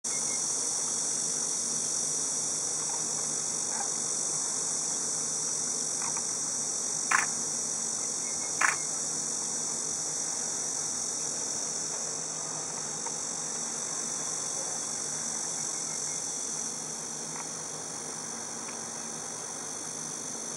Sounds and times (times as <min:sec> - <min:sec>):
Bee, wasp, etc.: 0:00.1 - 0:20.5.